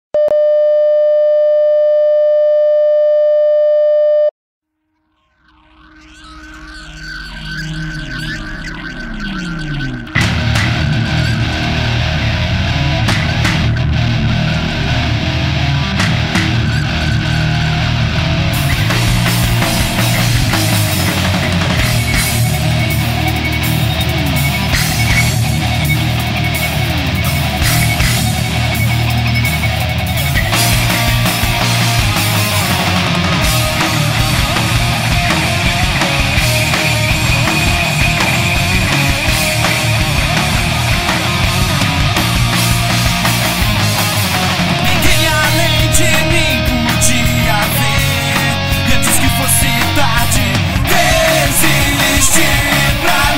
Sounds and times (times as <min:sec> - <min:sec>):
Busy signal: 0:00.2 - 0:04.3.